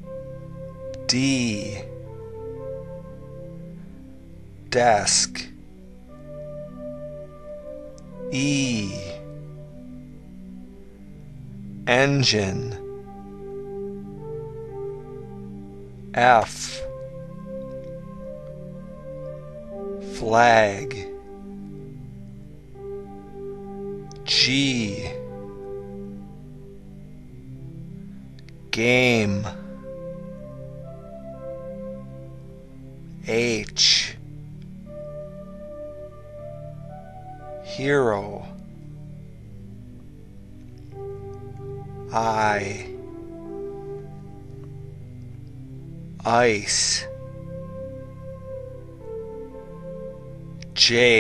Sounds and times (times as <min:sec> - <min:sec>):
Music: 0:00.0 - 0:51.2
Speech: 0:01.1 - 0:01.9, 0:04.8 - 0:05.5, 0:08.4 - 0:09.2, 0:11.9 - 0:12.8, 0:16.2 - 0:16.9, 0:20.1 - 0:21.1, 0:24.3 - 0:25.2, 0:28.8 - 0:29.6, 0:33.3 - 0:34.2, 0:37.7 - 0:38.6, 0:42.1 - 0:42.9, 0:46.3 - 0:47.1, 0:50.8 - 0:51.2.